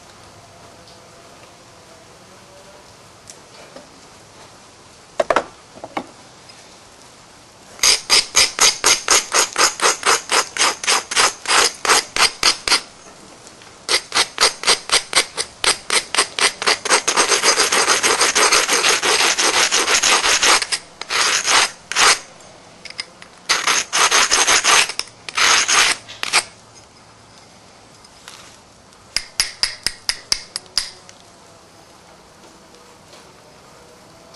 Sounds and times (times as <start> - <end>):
Filing (rasp): 7.8 - 12.9, 13.9 - 22.3, 23.5 - 26.5
Rub: 13.9 - 22.2, 23.5 - 26.4.